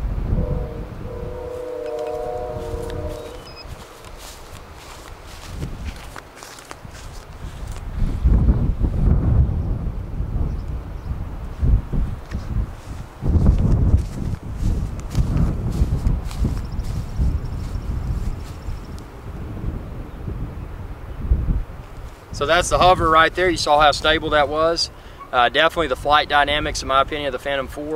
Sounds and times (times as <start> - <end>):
Wind noise (microphone): 0.0 - 25.0, 25.6 - 27.9.